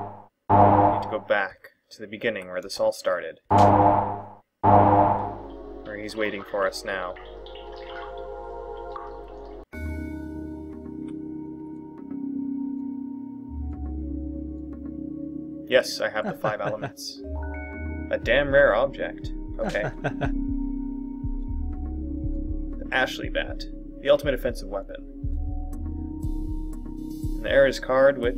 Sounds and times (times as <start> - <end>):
Speech: 1.1 - 3.4, 5.9 - 7.2, 15.7 - 17.2, 18.1 - 20.0, 22.8 - 25.0, 27.4 - 28.3
Music: 3.6 - 28.3.